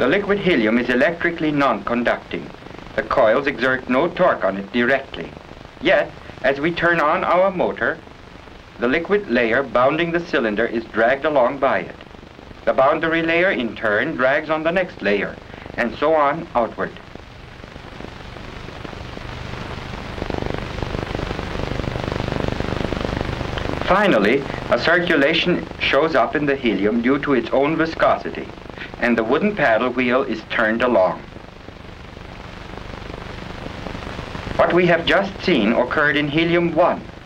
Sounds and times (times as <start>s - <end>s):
Speech: 0.0s - 8.0s, 8.8s - 12.0s, 12.7s - 17.0s, 23.8s - 31.3s, 34.6s - 37.1s.